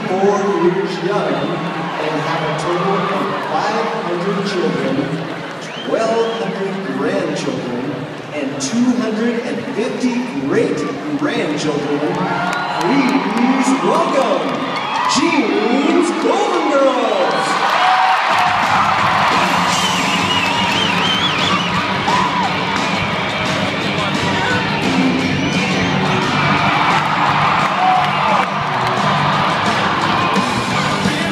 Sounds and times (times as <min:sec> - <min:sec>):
Electronic music: 0:18.5 - 0:31.3.